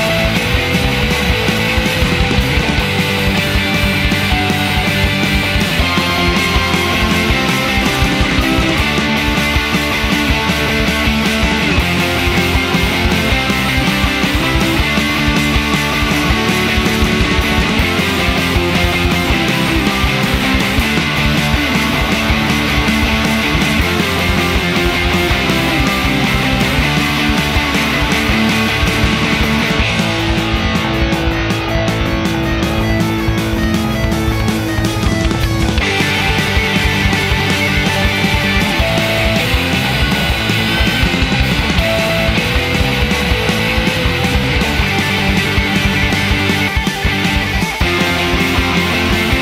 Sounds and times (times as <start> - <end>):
Music: 0.0 - 49.4.